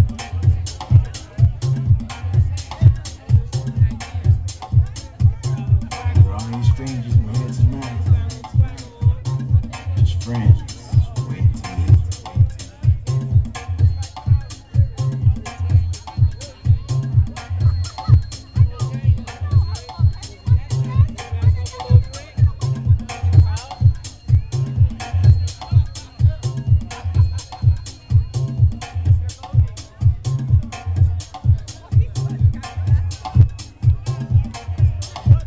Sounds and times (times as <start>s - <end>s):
House music: 0.0s - 35.4s
Speech: 0.0s - 35.4s.